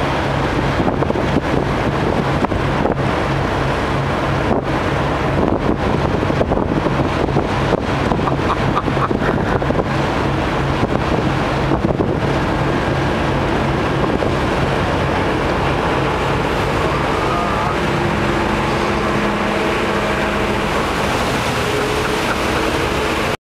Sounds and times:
Motorboat, speedboat: 0.0 - 23.4.

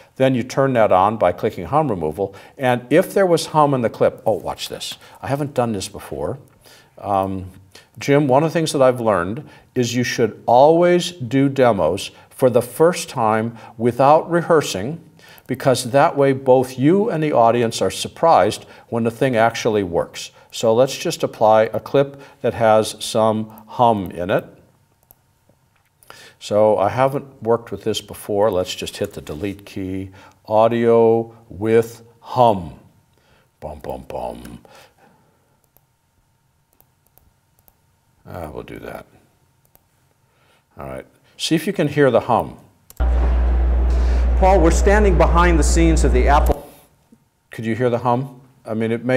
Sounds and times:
Speech: 0.2 - 24.6, 26.4 - 32.9, 33.6 - 34.7, 38.2 - 39.2, 40.8 - 42.7, 44.2 - 46.7, 47.5 - 49.1.

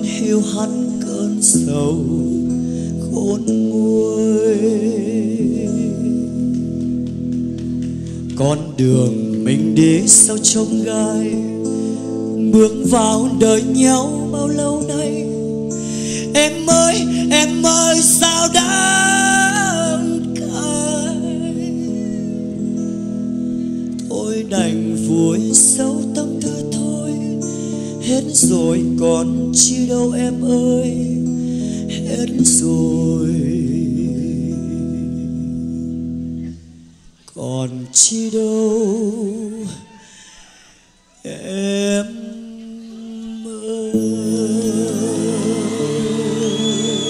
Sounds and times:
Bass guitar: 0.0 - 37.0, 44.0 - 47.0
Singing: 16.3 - 22.4, 37.3 - 40.0, 41.1 - 47.0.

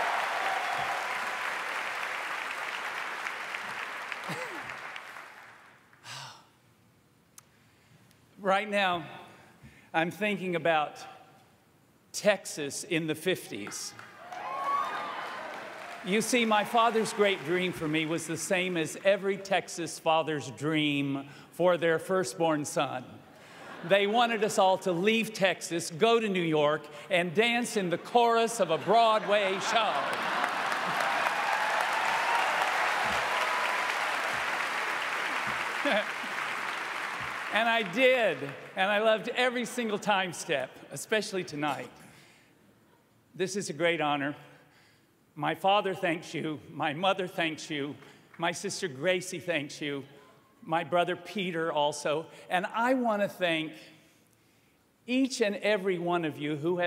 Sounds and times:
Narration, monologue: 6.0 - 14.2, 15.8 - 30.4, 37.4 - 56.8
Male speech, man speaking: 8.4 - 9.2, 10.0 - 11.2, 12.2 - 14.0, 16.1 - 23.2, 23.9 - 30.1, 37.5 - 42.0, 43.4 - 44.5, 45.4 - 53.9, 55.1 - 56.8.

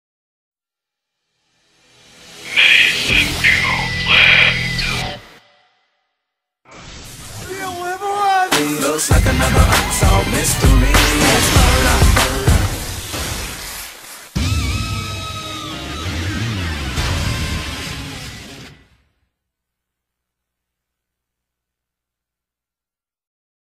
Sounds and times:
Music: 1.5 - 5.8, 7.5 - 12.9, 14.4 - 19.1.

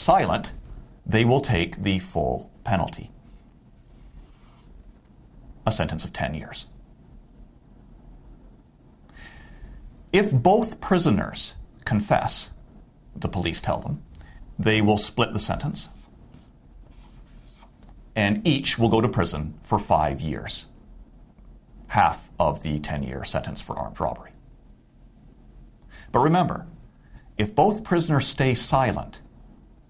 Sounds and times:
Speech: 0.0 - 3.2, 5.6 - 6.8, 10.1 - 12.6, 13.2 - 16.0, 18.2 - 20.8, 21.9 - 24.4, 26.1 - 26.8, 27.4 - 29.2.

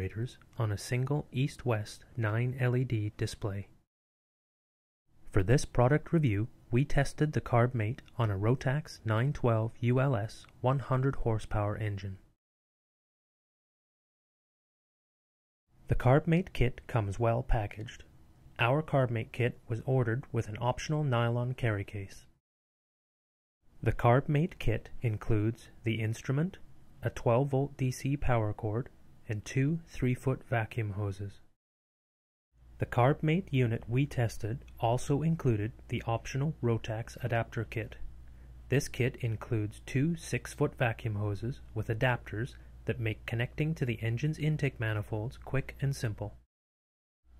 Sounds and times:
Speech: 0.0 - 3.8, 5.3 - 12.3, 15.9 - 22.3, 23.8 - 31.5, 32.8 - 38.1, 38.7 - 46.4.

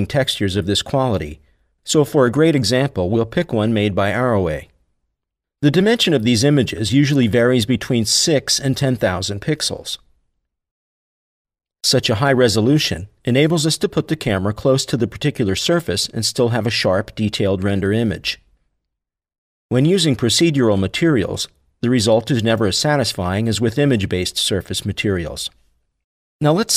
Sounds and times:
Speech: 0.0 - 4.8, 5.6 - 10.1, 11.8 - 18.5, 19.7 - 25.6, 26.4 - 26.7.

